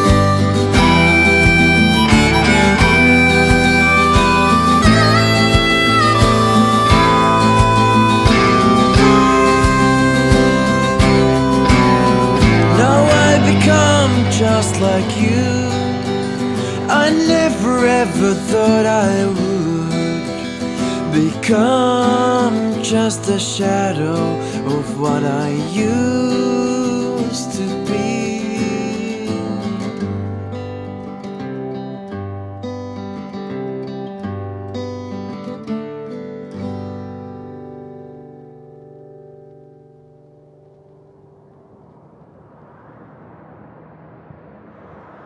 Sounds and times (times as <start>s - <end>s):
Acoustic guitar: 0.0s - 42.0s.